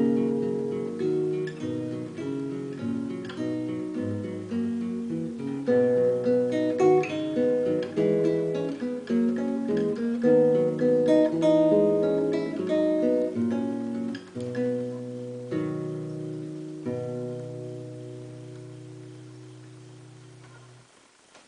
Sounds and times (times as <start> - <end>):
Strum: 0.0 - 21.4.